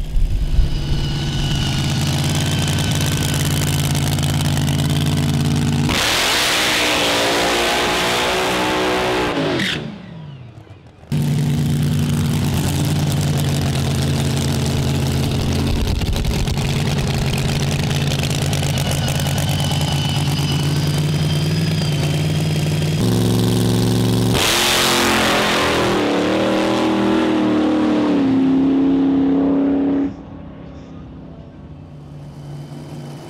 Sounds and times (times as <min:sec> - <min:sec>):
Car: 0:00.0 - 0:33.2
Heavy engine (low frequency): 0:00.0 - 0:33.2
Accelerating, revving, vroom: 0:05.8 - 0:10.0, 0:23.0 - 0:30.2.